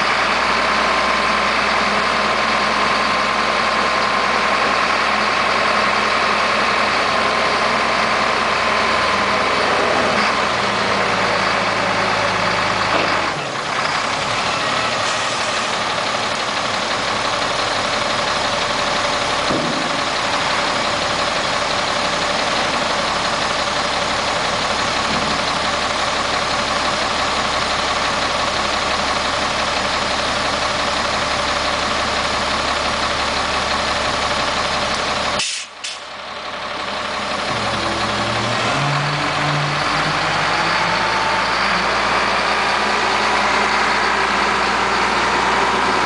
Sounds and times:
Truck: 0.0s - 46.0s.

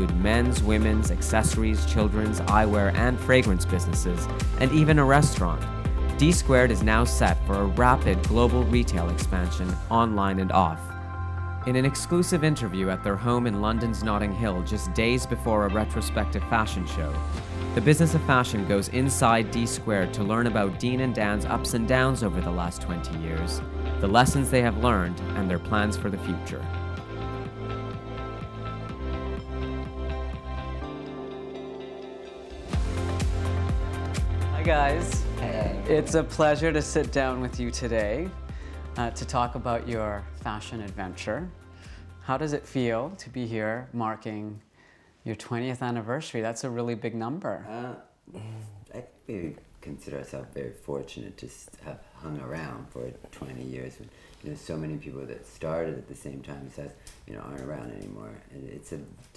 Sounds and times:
Speech: 0.0s - 10.9s, 11.6s - 17.2s, 17.8s - 26.7s, 34.6s - 38.3s, 39.0s - 41.6s, 42.2s - 44.6s, 45.3s - 59.3s
Music: 0.0s - 45.5s, 50.2s - 59.3s.

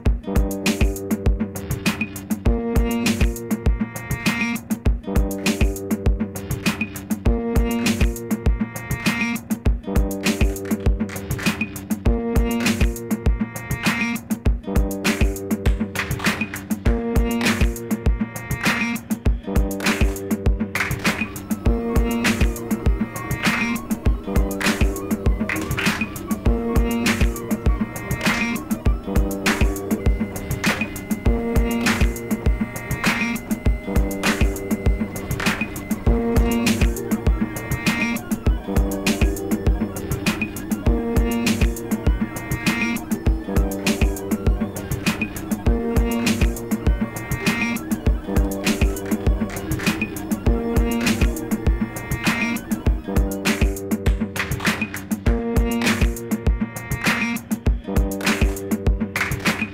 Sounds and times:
Music: 0.0s - 59.7s.

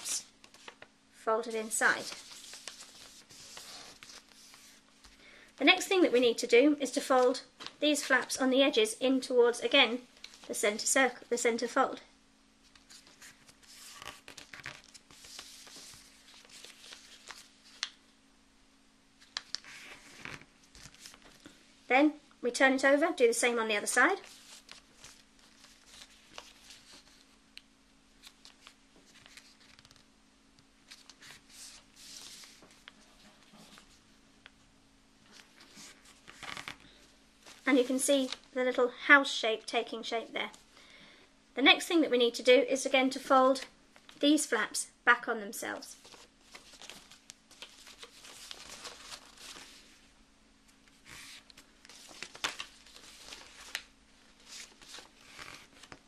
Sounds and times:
Inside, small room: 0.0s - 56.0s
Speech: 1.2s - 2.2s, 5.6s - 12.1s, 21.9s - 24.2s, 37.6s - 40.6s, 41.6s - 46.0s.

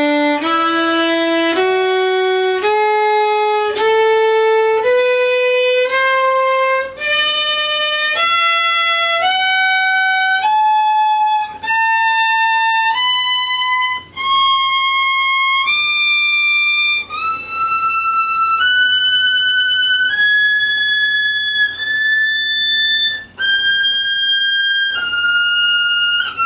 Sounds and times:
Violin, fiddle: 0.0s - 26.4s.

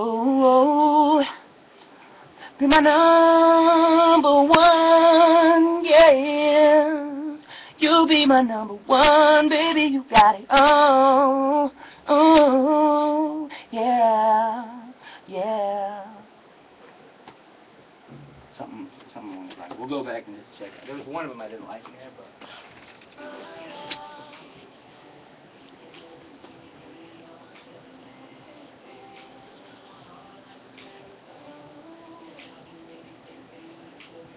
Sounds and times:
Speech: 18.6s - 22.4s
Music: 23.1s - 34.3s.

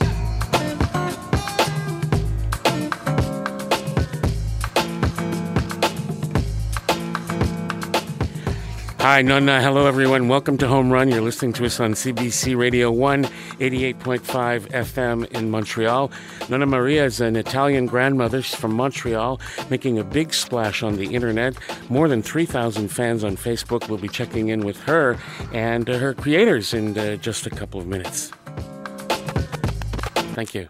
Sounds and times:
Music: 0.0s - 30.6s
Speech: 9.0s - 28.4s, 30.4s - 30.6s.

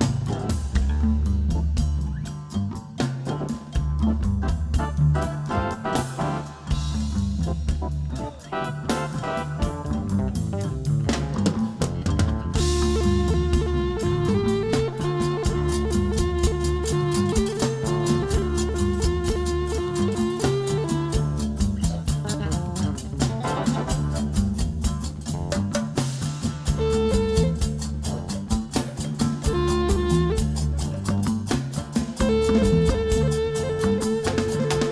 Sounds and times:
Music: 0.0s - 34.9s.

